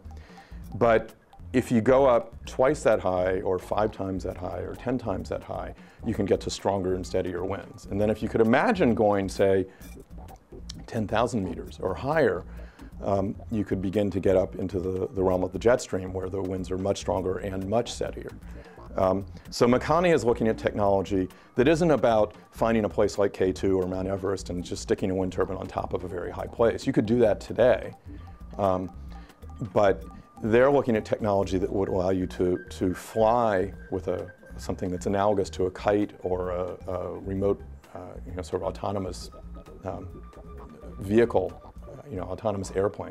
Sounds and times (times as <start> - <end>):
Music: 0.0 - 43.1
Speech: 0.8 - 9.7, 10.7 - 28.0, 28.6 - 28.9, 29.6 - 43.1.